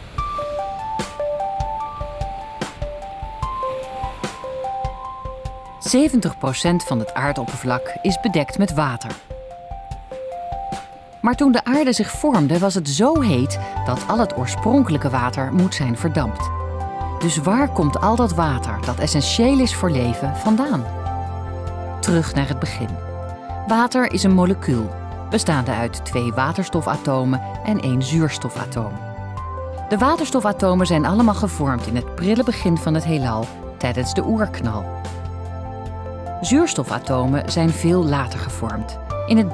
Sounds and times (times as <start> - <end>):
Music: 0.0 - 39.5
Speech: 5.8 - 9.2, 11.2 - 16.5, 17.2 - 20.9, 22.0 - 23.0, 23.7 - 29.0, 29.9 - 34.9, 36.4 - 39.5.